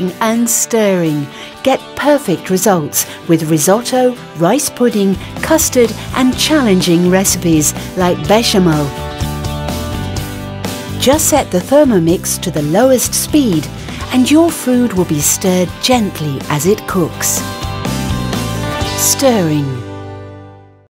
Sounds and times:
Speech: 0:00.0 - 0:09.0, 0:11.0 - 0:17.5, 0:18.9 - 0:19.8
Music: 0:00.0 - 0:20.8.

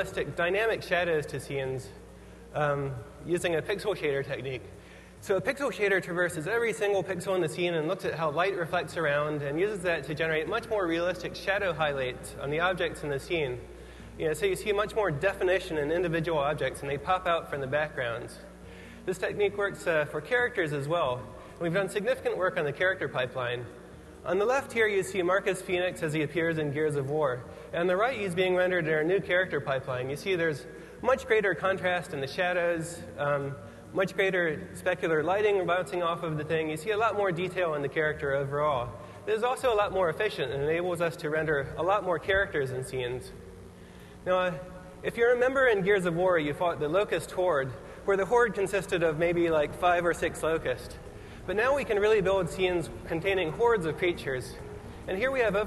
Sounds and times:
Speech: 0:00.0 - 0:43.4, 0:44.2 - 0:55.6.

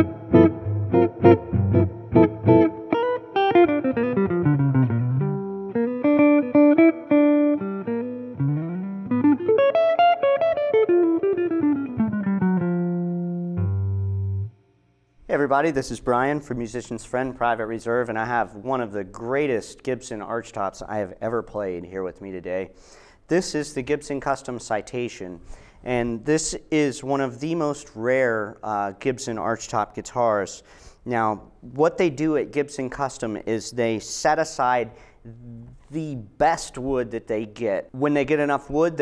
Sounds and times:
Electric guitar: 0:00.0 - 0:14.7
Effects unit: 0:00.0 - 0:15.2.

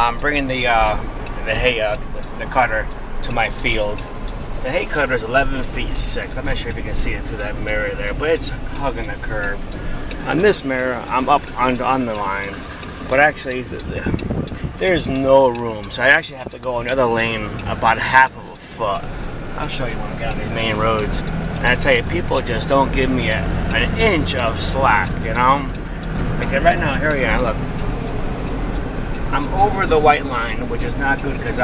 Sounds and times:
Car: 0:00.0 - 0:31.6.

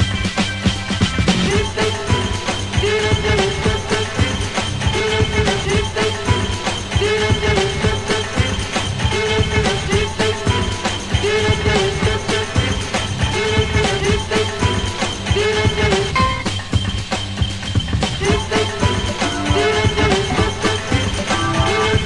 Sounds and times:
Electronica: 0:15.8 - 0:17.4.

